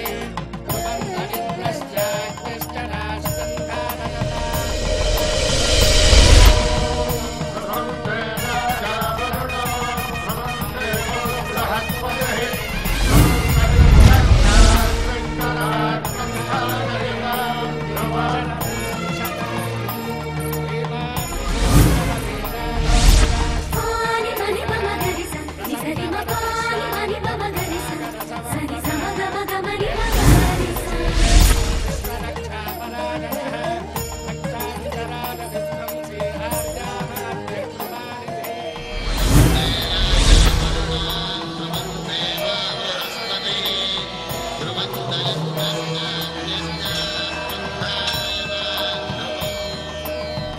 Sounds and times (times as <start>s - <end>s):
Music: 0.0s - 50.5s.